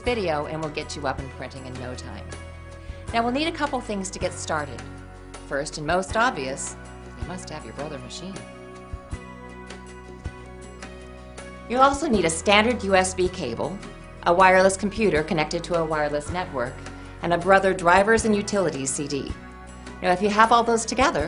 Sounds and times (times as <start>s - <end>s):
Speech: 0.0s - 2.3s, 3.1s - 4.8s, 5.5s - 8.4s, 11.7s - 19.4s, 20.0s - 21.2s
Music: 0.0s - 21.2s.